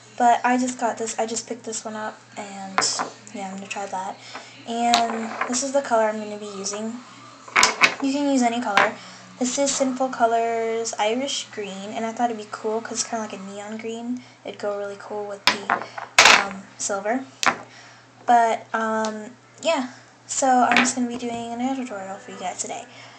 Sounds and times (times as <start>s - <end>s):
Speech: 0.0s - 17.3s, 18.3s - 23.0s.